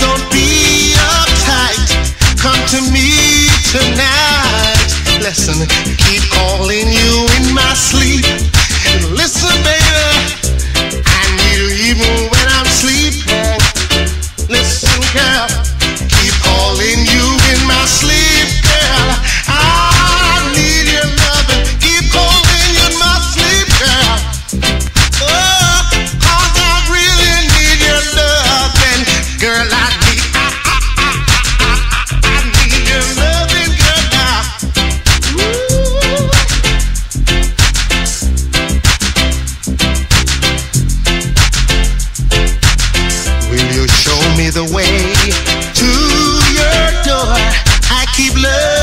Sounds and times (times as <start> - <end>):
Reggae: 0.0 - 48.8.